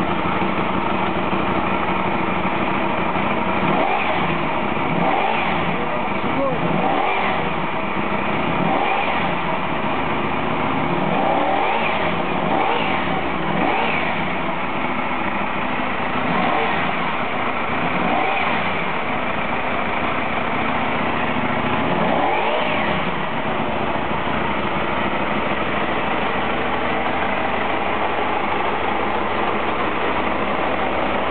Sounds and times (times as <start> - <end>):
Medium engine (mid frequency): 0.0 - 31.3
Vehicle: 0.0 - 31.3
Accelerating, revving, vroom: 3.6 - 5.8, 6.7 - 7.6, 8.6 - 9.4, 11.1 - 14.2, 16.3 - 17.0, 18.0 - 18.8, 21.9 - 23.1.